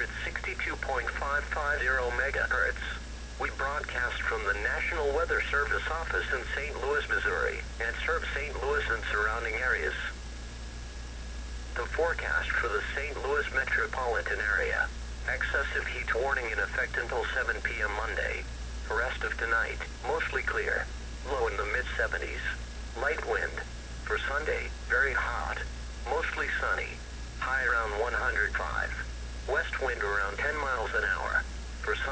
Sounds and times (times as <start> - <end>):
Radio: 0.0 - 10.2, 11.4 - 32.1
Speech: 0.0 - 10.2, 11.8 - 32.1.